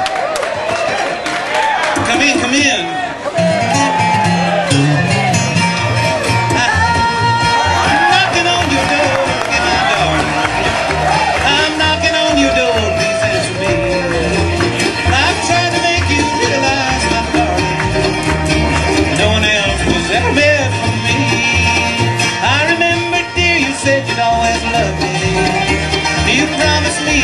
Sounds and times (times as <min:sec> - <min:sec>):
Guitar: 0:01.9 - 0:27.2
Bluegrass: 0:02.0 - 0:27.2.